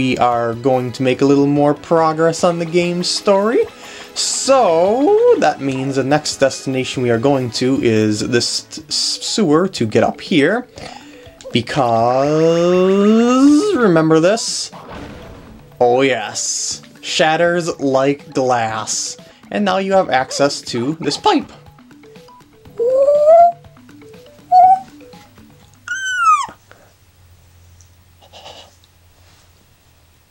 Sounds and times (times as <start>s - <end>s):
Speech: 0.0s - 10.7s, 11.5s - 14.8s, 15.8s - 21.6s
Music: 0.0s - 26.8s.